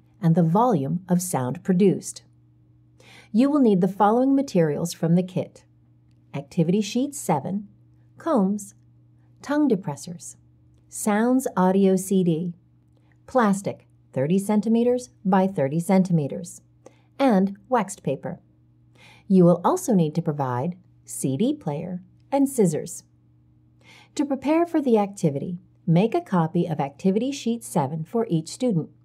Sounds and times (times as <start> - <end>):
Speech: 0.2 - 2.3, 3.3 - 5.7, 6.3 - 8.8, 9.4 - 12.6, 13.3 - 16.6, 17.2 - 18.4, 19.3 - 23.1, 24.2 - 29.0.